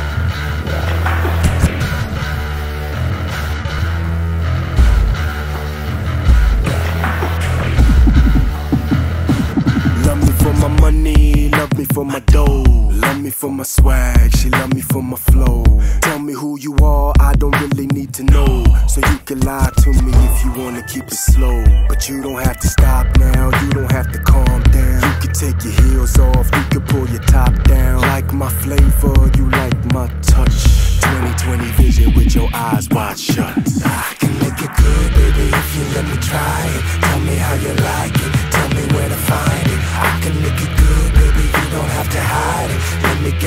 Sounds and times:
Pop music: 0.0s - 3.8s, 6.1s - 43.4s
Ska: 4.6s - 43.4s.

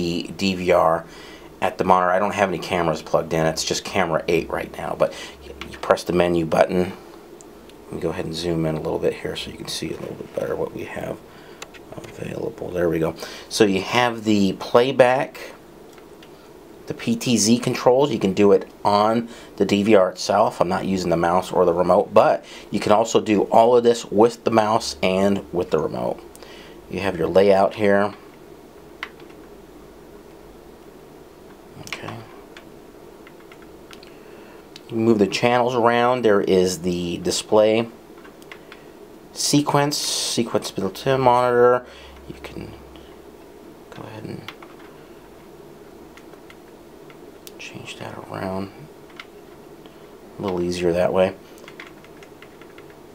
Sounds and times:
Speech: 0.0s - 7.0s, 7.9s - 11.2s, 11.9s - 15.6s, 16.9s - 26.2s, 26.9s - 28.2s, 31.8s - 32.4s, 34.8s - 38.0s, 39.4s - 42.9s, 43.9s - 44.6s, 47.5s - 48.9s, 50.4s - 51.4s.

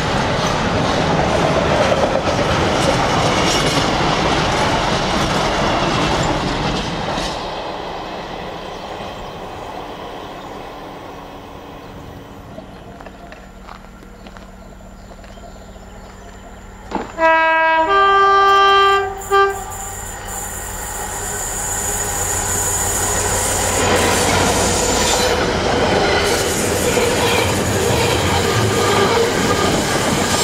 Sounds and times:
Railroad car, train wagon: 0.0s - 30.4s
Train: 0.0s - 30.4s.

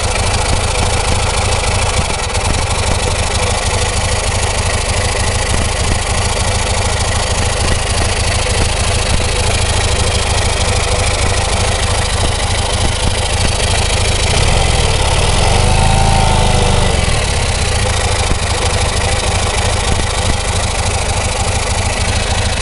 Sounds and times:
Idling: 0.0s - 22.6s
Medium engine (mid frequency): 0.0s - 22.6s
Vehicle: 0.0s - 22.6s
Accelerating, revving, vroom: 14.3s - 17.2s.

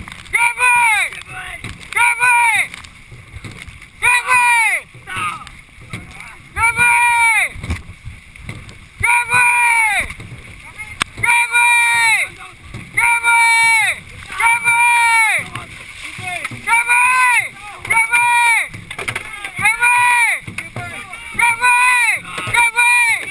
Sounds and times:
Speech: 9.0s - 23.3s.

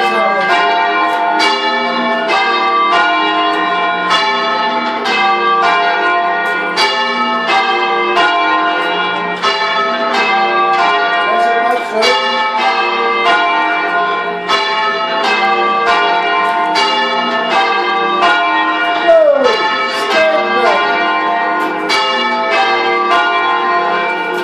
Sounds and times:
Speech: 0.0s - 0.5s, 11.3s - 12.2s, 19.1s - 20.9s.

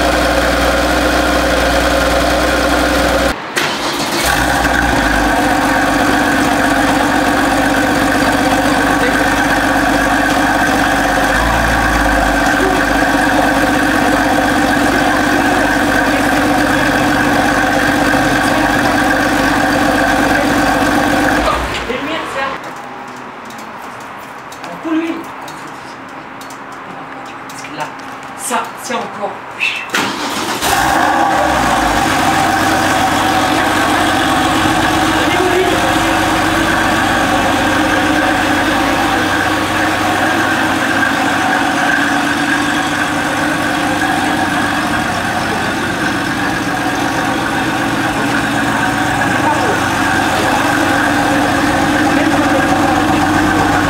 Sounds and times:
Speech: 21.4s - 22.6s, 24.6s - 25.3s, 27.5s - 29.9s, 35.2s - 36.0s, 49.2s - 52.9s.

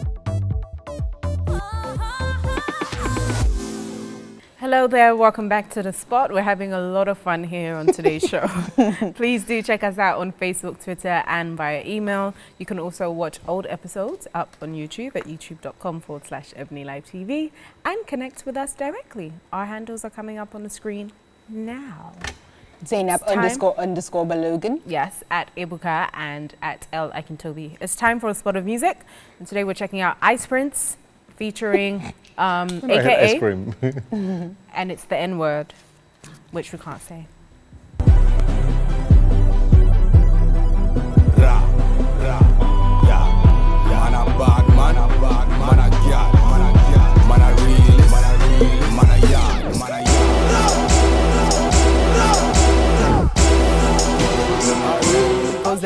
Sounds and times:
Music: 0.0s - 4.5s, 38.0s - 55.8s
Speech: 22.8s - 26.0s, 31.4s - 34.0s.

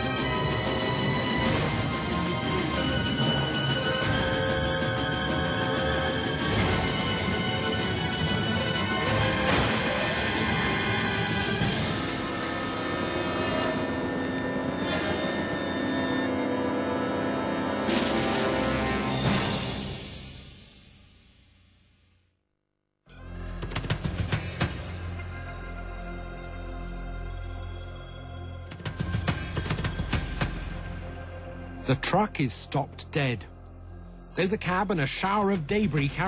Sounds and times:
Music: 0.0s - 22.4s, 23.0s - 36.2s.

